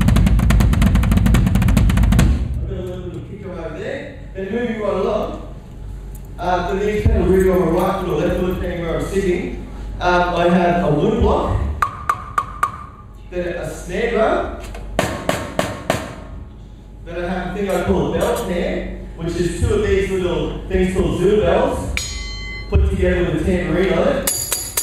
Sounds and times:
Drum: 0.0 - 3.4, 7.0 - 7.5, 11.1 - 13.1, 22.8 - 23.3
Speech: 2.6 - 5.5, 6.4 - 11.8, 13.3 - 14.6, 17.1 - 22.0, 22.7 - 24.3.

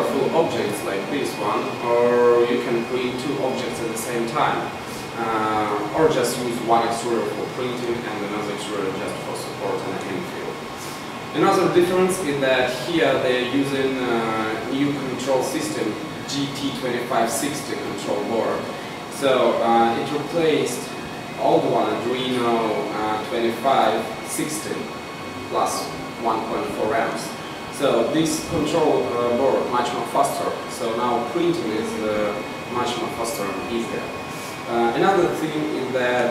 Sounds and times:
Speech: 0.0 - 10.7, 11.3 - 36.3
Printer: 0.0 - 36.3.

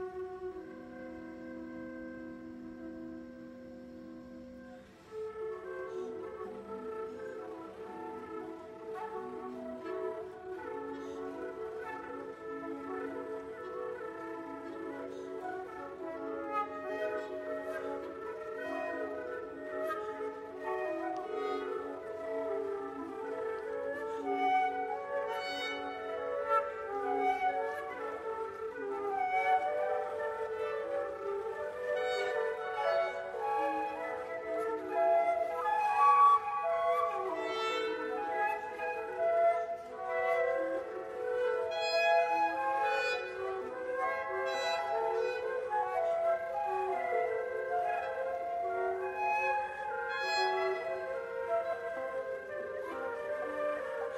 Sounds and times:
Music: 0.0 - 54.1.

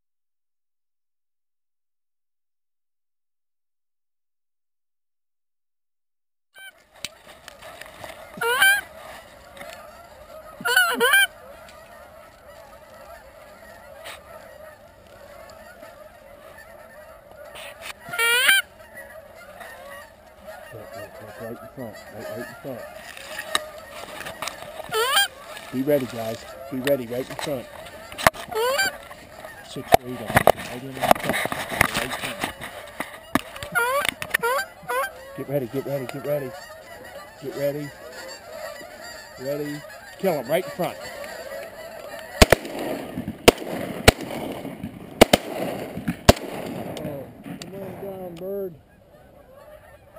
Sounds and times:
Honk: 6.6 - 50.1.

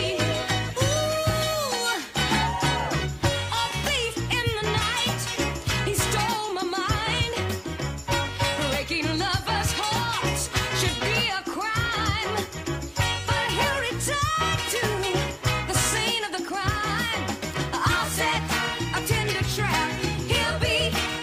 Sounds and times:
Rhythm and blues: 0.0 - 21.2.

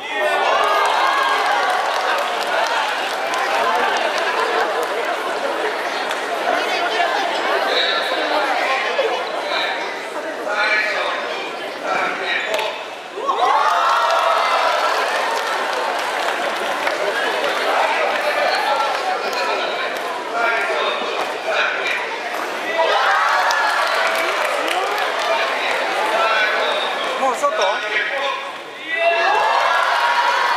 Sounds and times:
Speech: 0.0 - 13.8, 15.6 - 29.7.

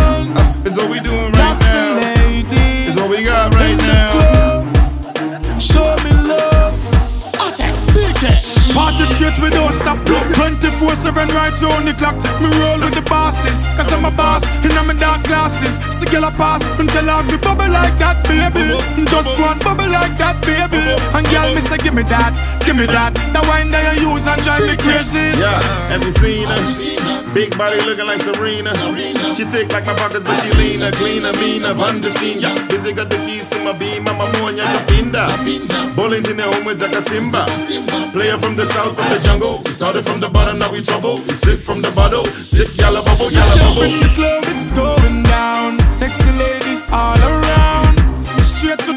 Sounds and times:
Music: 0.0 - 48.9.

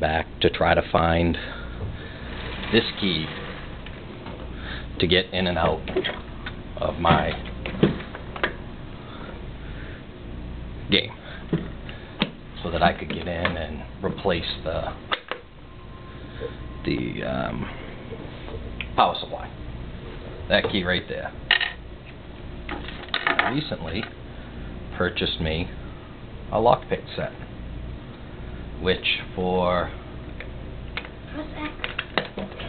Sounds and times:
Speech: 0.0 - 1.5, 2.7 - 3.4, 5.0 - 5.9, 6.8 - 7.4, 10.9 - 11.2, 12.6 - 15.0, 16.8 - 17.7, 19.0 - 19.6, 20.5 - 21.4, 23.5 - 24.1, 26.5 - 27.4, 28.8 - 30.0.

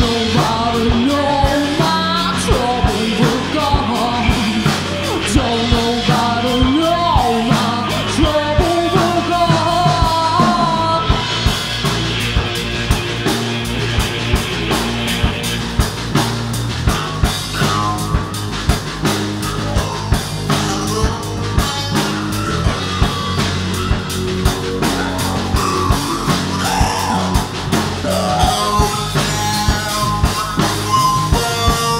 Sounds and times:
Singing: 0.0 - 11.2
Rock music: 0.0 - 31.9.

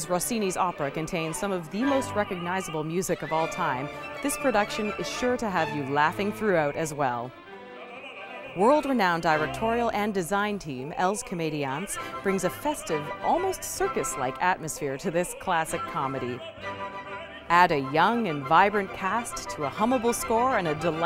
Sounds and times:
Speech: 0.0 - 7.3, 8.6 - 16.4, 17.5 - 21.0
Opera: 0.0 - 21.0.

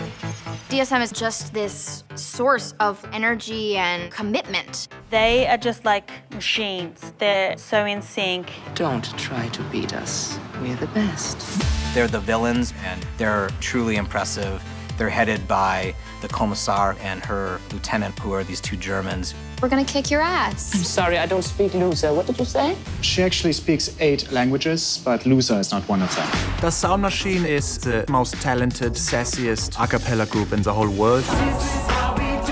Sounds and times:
Music: 0.0 - 32.5.

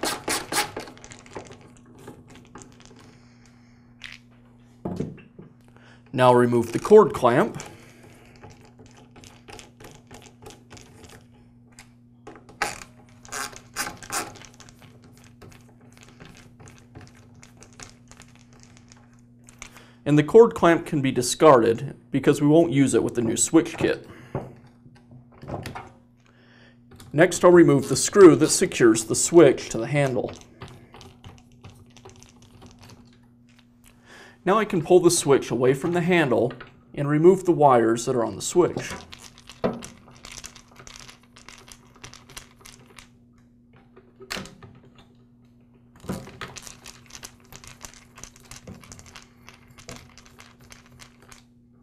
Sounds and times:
Speech: 6.2 - 7.6, 20.1 - 24.1, 27.2 - 30.4, 34.4 - 39.0.

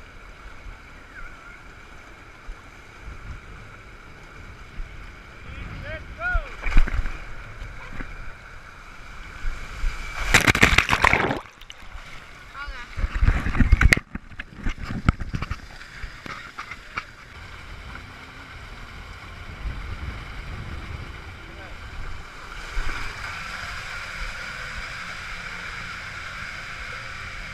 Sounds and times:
Gurgling: 10.0 - 12.3.

